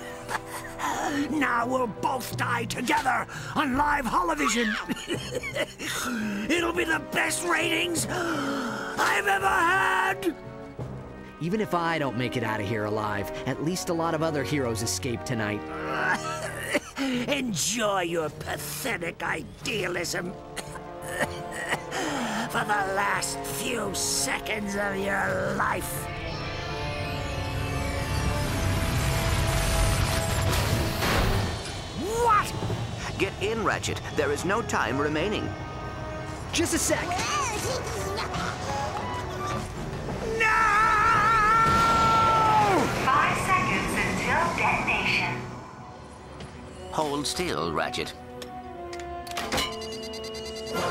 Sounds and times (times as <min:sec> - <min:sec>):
Music: 0:00.0 - 0:50.9.